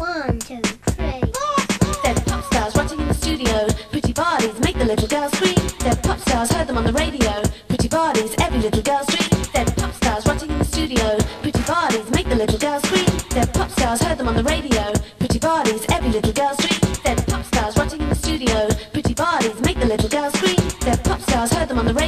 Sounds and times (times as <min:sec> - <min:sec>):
Music: 0:00.0 - 0:22.0.